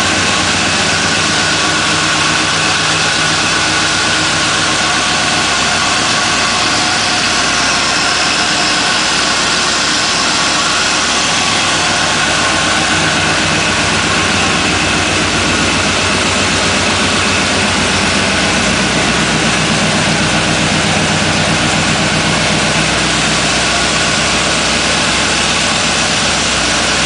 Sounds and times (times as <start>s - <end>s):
Vehicle: 0.0s - 27.0s.